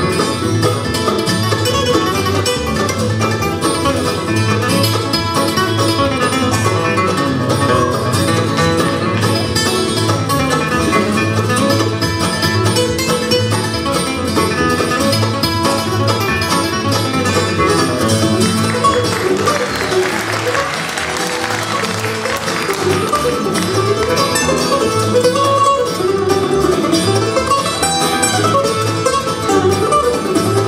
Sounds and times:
Bluegrass: 0.0 - 30.6
Guitar: 0.0 - 30.6.

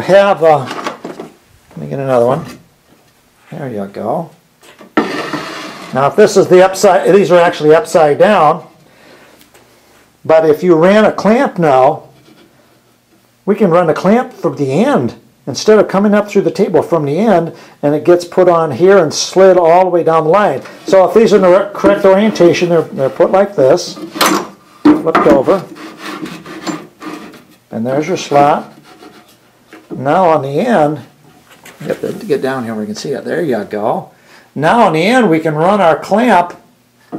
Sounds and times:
Speech: 0.0 - 0.8, 1.7 - 2.6, 3.5 - 4.4, 5.9 - 8.7, 10.2 - 12.1, 13.5 - 24.1, 24.9 - 25.7, 27.7 - 28.8, 30.0 - 31.1, 31.8 - 36.7
Inside, small room: 0.0 - 37.1.

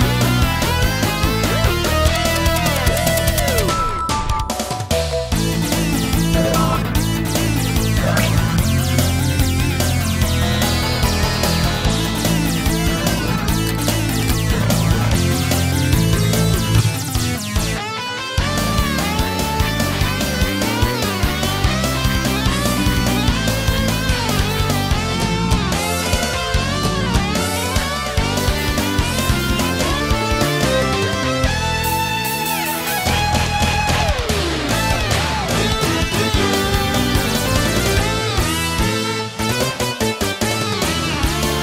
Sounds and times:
Independent music: 0.0 - 41.6.

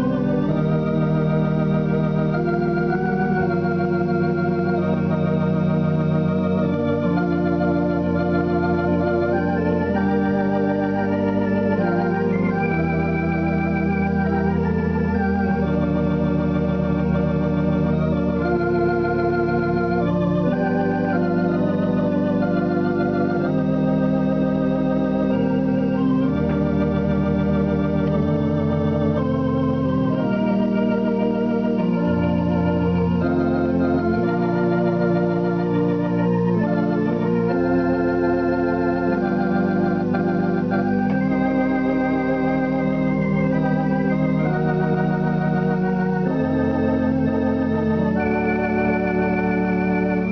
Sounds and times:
Hammond organ: 0.0 - 50.3.

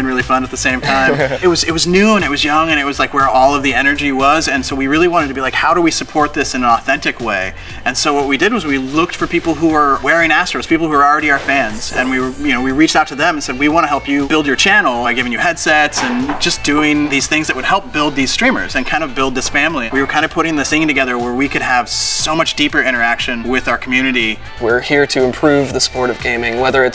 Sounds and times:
Music: 0.0 - 26.9
Speech: 0.0 - 26.9.

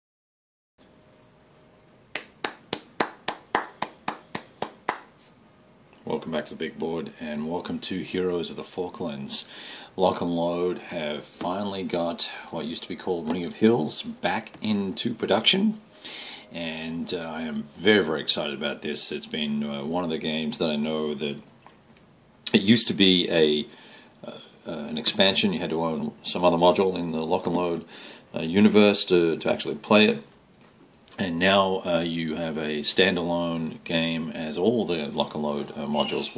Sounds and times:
Inside, small room: 0.8 - 36.3
Speech: 6.0 - 15.8, 16.5 - 21.5, 22.5 - 30.3, 31.2 - 36.3.

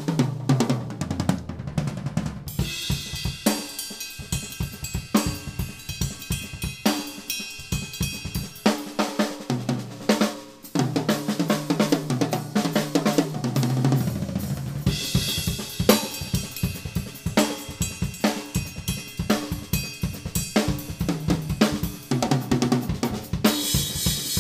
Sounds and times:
Drum: 0.0 - 24.4
Drum kit: 0.0 - 24.4.

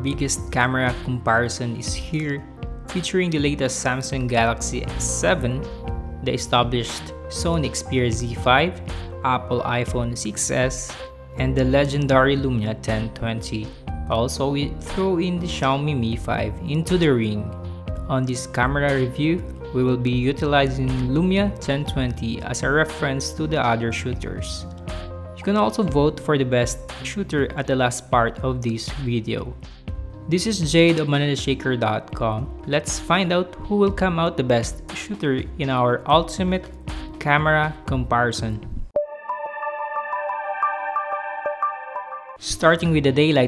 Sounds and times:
Speech: 0.0 - 24.7, 25.4 - 29.6, 30.3 - 38.7, 42.4 - 43.4
Music: 0.0 - 43.4.

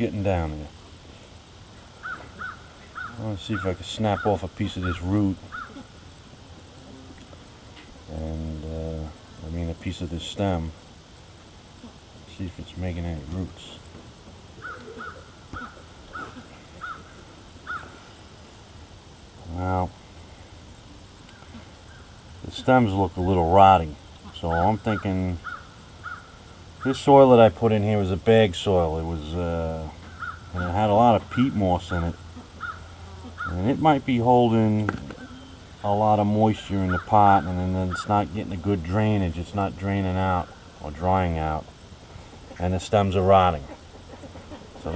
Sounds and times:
Bird vocalization, bird call, bird song: 2.0 - 6.0, 14.6 - 18.2, 24.2 - 27.1, 30.0 - 33.8, 36.6 - 38.2.

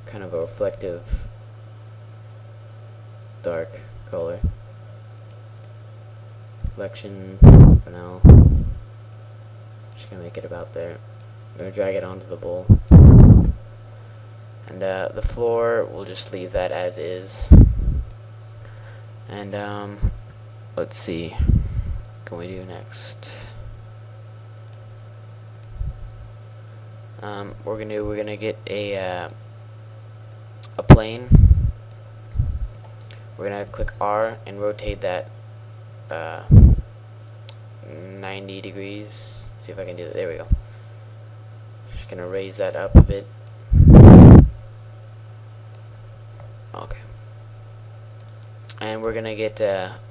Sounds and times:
Speech: 0.0 - 1.3, 3.4 - 4.6, 6.7 - 8.2, 10.0 - 11.0, 11.6 - 12.7, 14.6 - 17.5, 19.3 - 20.2, 20.8 - 21.4, 22.2 - 23.6, 27.2 - 29.4, 30.6 - 31.3, 33.4 - 35.3, 36.1 - 36.5, 37.8 - 40.6, 41.9 - 43.3, 46.7 - 47.2, 48.7 - 50.1.

